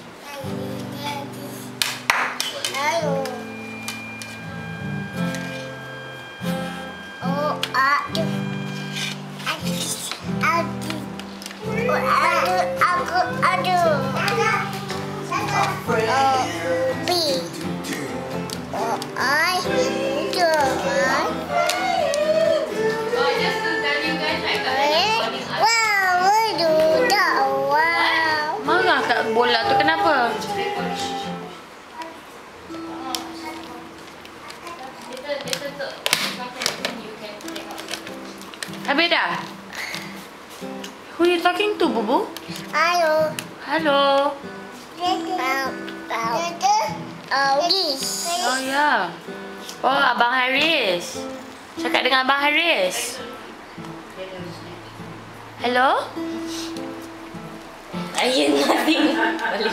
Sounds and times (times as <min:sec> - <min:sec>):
Music: 0:00.0 - 0:59.7.